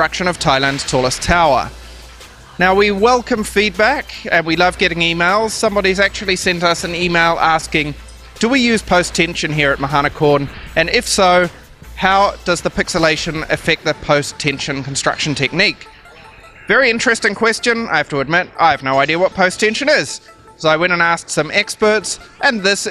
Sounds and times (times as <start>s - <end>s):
Speech: 0.0s - 1.7s, 2.6s - 15.9s, 16.7s - 22.9s
Music: 0.0s - 22.9s.